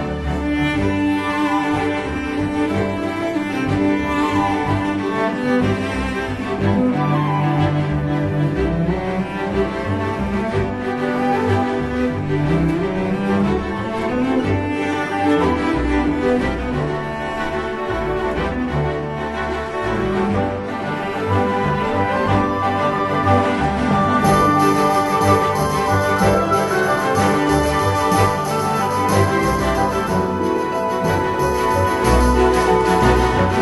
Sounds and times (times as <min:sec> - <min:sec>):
Soundtrack music: 0:00.0 - 0:33.6
Theme music: 0:00.0 - 0:33.6.